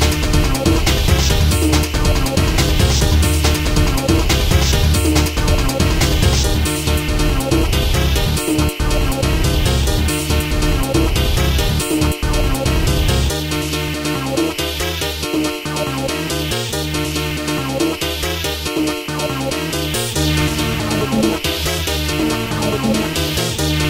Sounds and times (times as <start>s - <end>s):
Trance music: 0.0s - 23.9s.